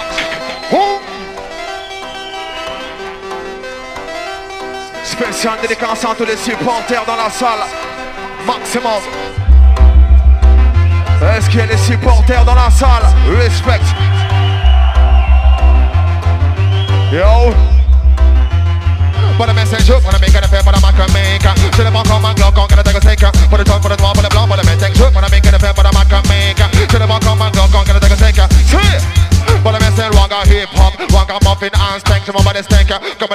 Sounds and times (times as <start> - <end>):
Music: 0.0 - 33.3.